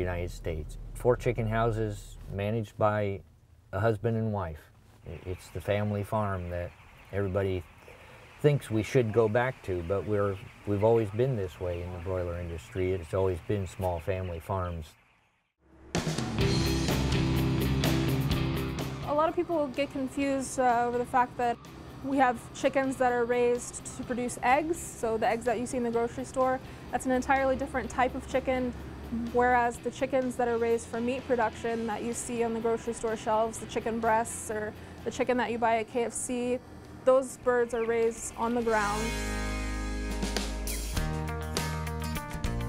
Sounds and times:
Speech: 0:00.0 - 0:03.2, 0:03.8 - 0:07.6, 0:08.4 - 0:15.0, 0:19.1 - 0:39.1
Music: 0:15.6 - 0:35.4, 0:38.5 - 0:42.6.

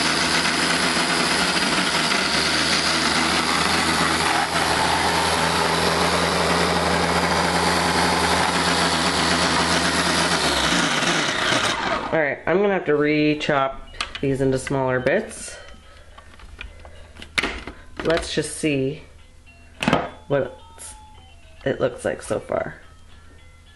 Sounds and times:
Light engine (high frequency): 0:00.0 - 0:12.2
Speech: 0:12.1 - 0:15.6, 0:18.0 - 0:19.1, 0:20.3 - 0:21.0, 0:21.6 - 0:22.8.

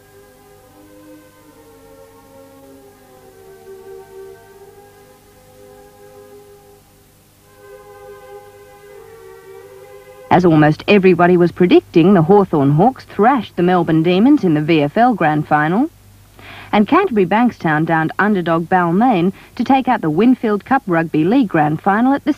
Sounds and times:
Music: 0:00.0 - 0:22.3
Speech: 0:10.3 - 0:15.9, 0:16.7 - 0:22.3.

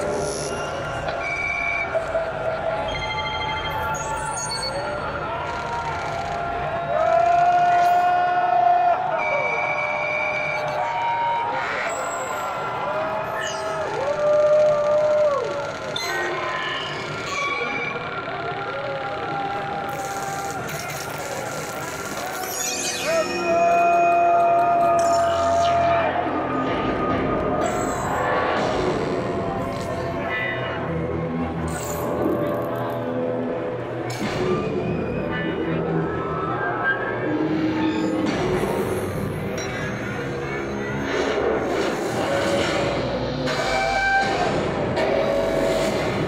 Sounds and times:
Music: 0:20.6 - 0:46.2.

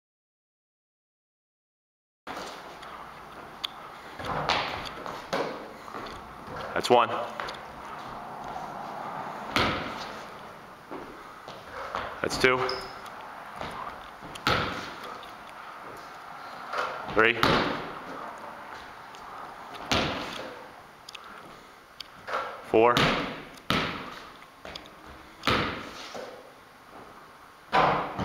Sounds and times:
Basketball bounce: 0:04.2 - 0:05.6, 0:09.5 - 0:10.1, 0:13.6 - 0:15.0, 0:17.1 - 0:17.9, 0:19.8 - 0:20.4, 0:23.0 - 0:24.2, 0:25.4 - 0:25.9
Speech: 0:06.7 - 0:07.4, 0:12.2 - 0:12.8, 0:17.1 - 0:17.5, 0:22.7 - 0:23.0.

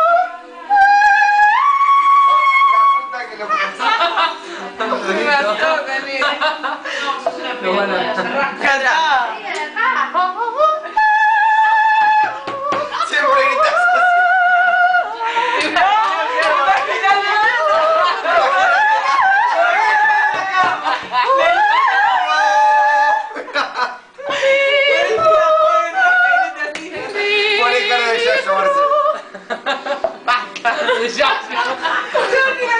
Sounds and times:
Female singing: 0:00.0 - 0:03.1, 0:09.2 - 0:23.4, 0:24.2 - 0:29.3, 0:32.2 - 0:32.8
Opera: 0:00.0 - 0:03.1, 0:09.8 - 0:29.5.

